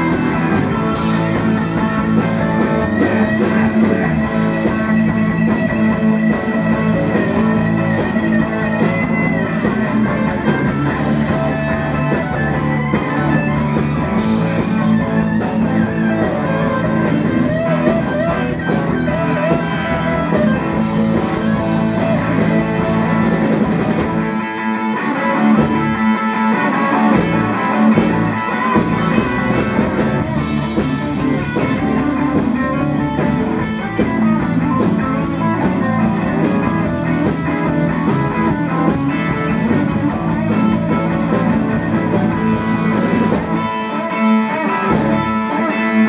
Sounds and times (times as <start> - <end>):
Rock and roll: 0.0 - 46.0.